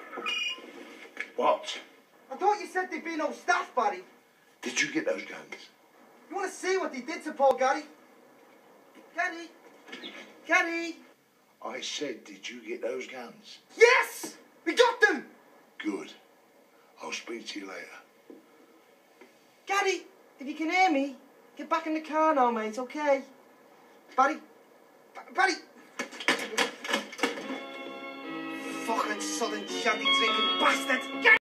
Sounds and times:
Speech: 1.4 - 7.9, 9.1 - 9.6, 10.5 - 16.2, 17.0 - 18.1, 19.7 - 23.3, 25.2 - 25.7, 28.8 - 31.4
Music: 27.2 - 31.4.

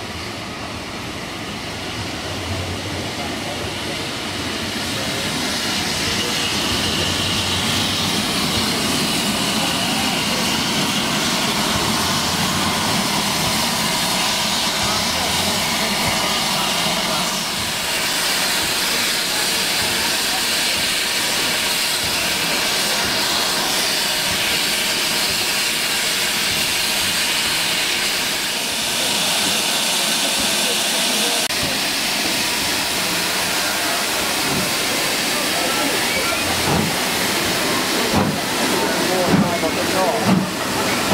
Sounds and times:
Outside, urban or manmade: 0.0 - 41.1
Steam: 0.0 - 41.1
Train: 0.0 - 41.1.

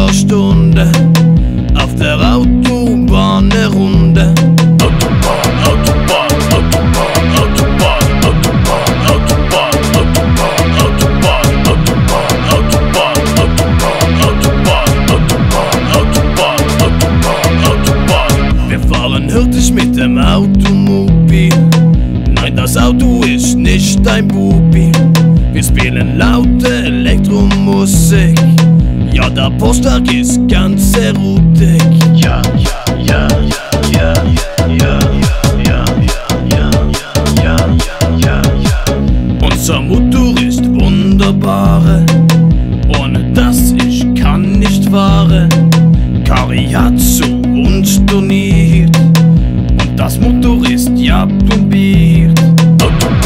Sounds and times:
Dance music: 0.0 - 53.2
Rock music: 0.0 - 53.2.

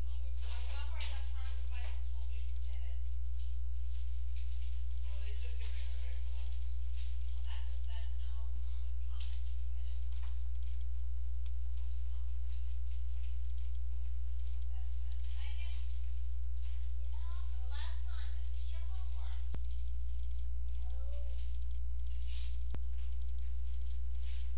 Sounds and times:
Speech: 0.0 - 3.1, 5.0 - 6.5, 7.4 - 10.6, 14.7 - 15.9, 17.0 - 19.5, 20.8 - 21.5.

